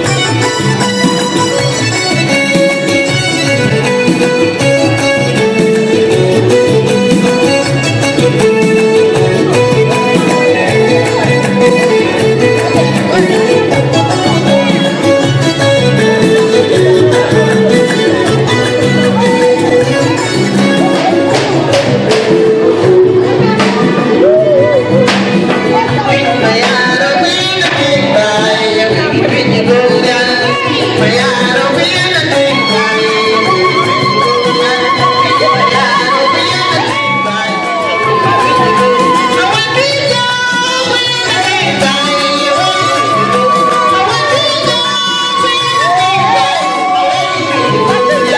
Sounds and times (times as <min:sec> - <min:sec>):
Traditional music: 0:00.0 - 0:48.3.